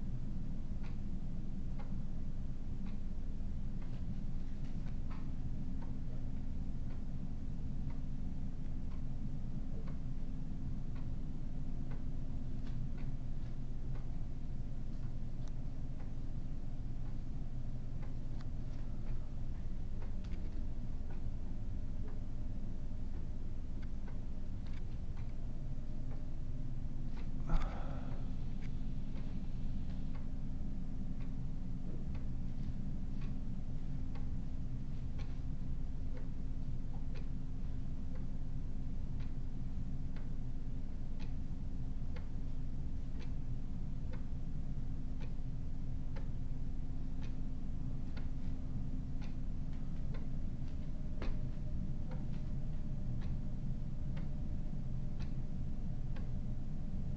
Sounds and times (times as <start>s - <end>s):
Tick: 11.9s - 14.1s, 23.8s - 25.4s, 27.2s - 27.7s, 31.2s - 33.4s, 48.1s - 48.6s, 49.2s - 53.4s, 55.2s - 55.4s.